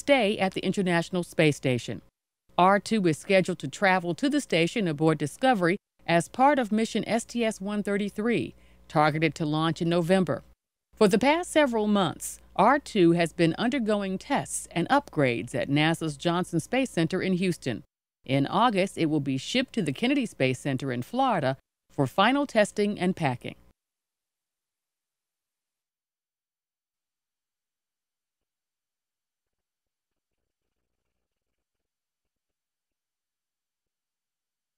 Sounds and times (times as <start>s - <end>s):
Speech: 0.0s - 2.0s, 2.6s - 23.6s.